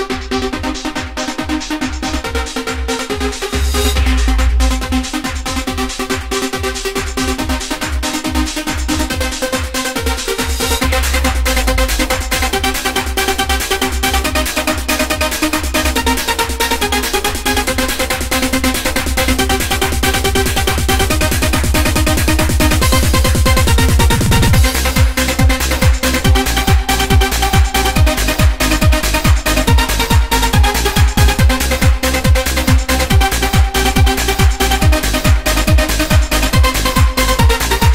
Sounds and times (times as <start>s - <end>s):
Trance music: 0.0s - 37.9s.